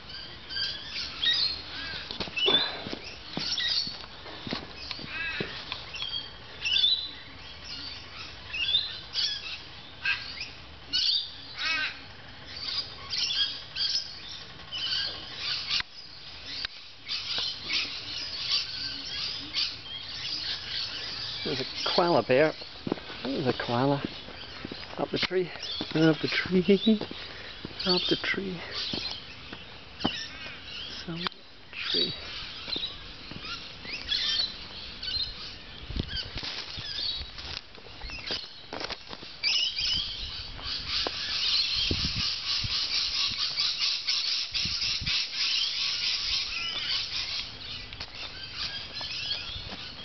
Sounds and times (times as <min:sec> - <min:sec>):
Speech: 0:21.5 - 0:22.6, 0:23.2 - 0:24.1, 0:25.0 - 0:27.1, 0:27.8 - 0:28.8, 0:31.0 - 0:32.2.